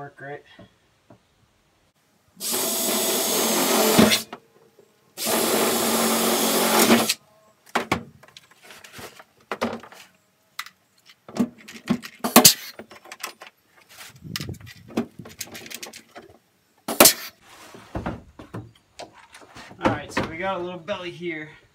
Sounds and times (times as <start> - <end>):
Drill: 2.4 - 4.3, 5.2 - 7.2.